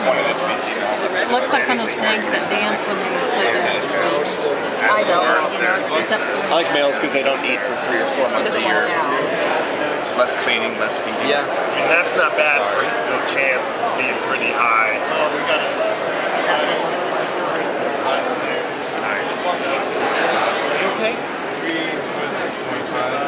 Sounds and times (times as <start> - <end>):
Speech: 0.0 - 9.4, 10.0 - 23.2
Inside, public space: 0.0 - 23.2.